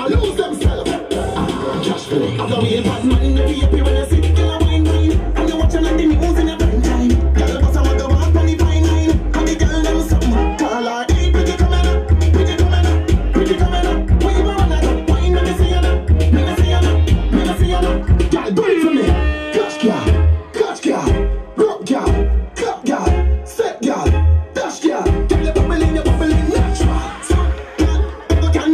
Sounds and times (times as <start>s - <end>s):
Music: 0.0s - 28.7s.